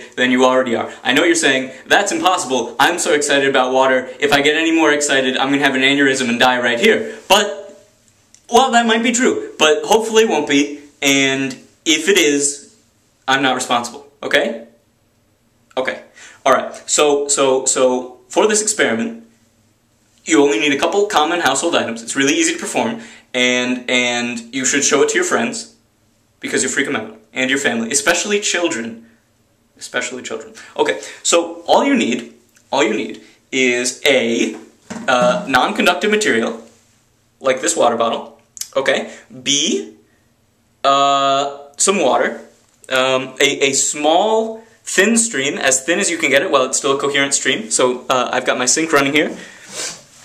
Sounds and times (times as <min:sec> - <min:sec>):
Speech: 0:00.0 - 0:07.8, 0:08.5 - 0:14.8, 0:15.7 - 0:19.3, 0:20.2 - 0:25.8, 0:26.4 - 0:29.0, 0:29.8 - 0:36.8, 0:37.4 - 0:40.0, 0:40.8 - 0:49.4.